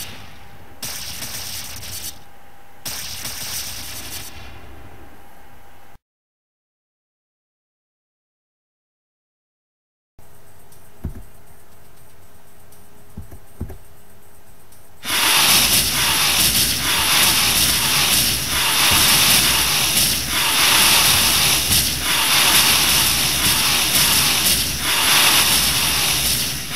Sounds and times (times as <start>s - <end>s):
Sound effect: 0.0s - 5.3s, 15.0s - 26.7s.